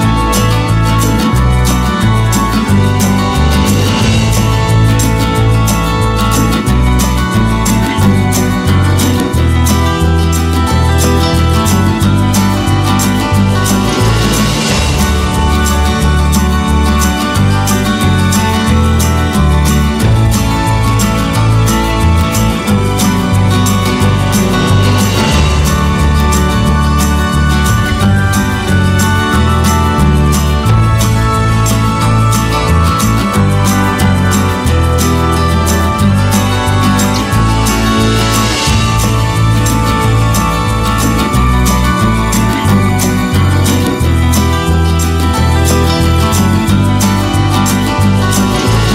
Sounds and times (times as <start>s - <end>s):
Music: 0.0s - 48.9s.